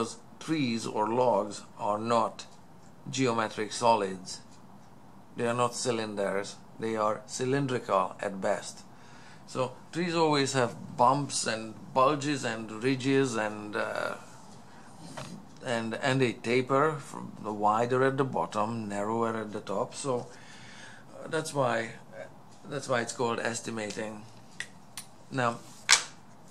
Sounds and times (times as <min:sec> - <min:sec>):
Speech: 0:00.0 - 0:04.5, 0:05.4 - 0:08.9, 0:09.5 - 0:14.3, 0:15.6 - 0:20.3, 0:21.1 - 0:24.4, 0:25.3 - 0:25.7.